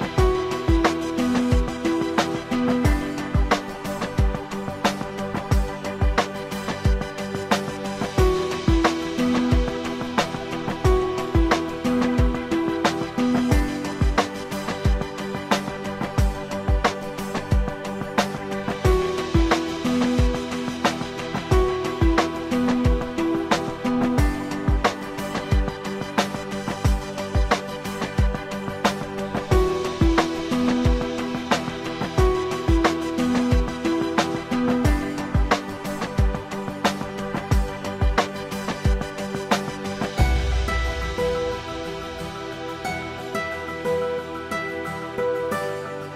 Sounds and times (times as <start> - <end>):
Music: 0.0 - 46.1.